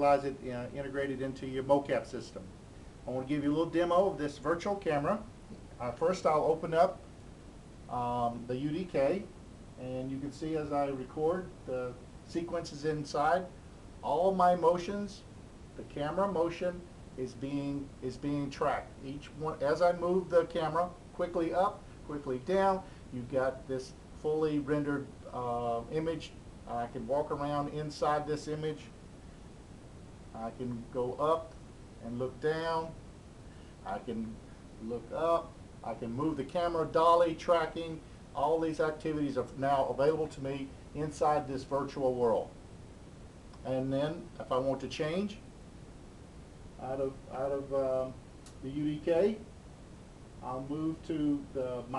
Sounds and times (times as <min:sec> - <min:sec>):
Speech: 0:00.0 - 0:07.1, 0:07.9 - 0:29.0, 0:30.3 - 0:33.0, 0:33.8 - 0:42.6, 0:43.6 - 0:45.5, 0:46.8 - 0:49.5, 0:50.4 - 0:51.9.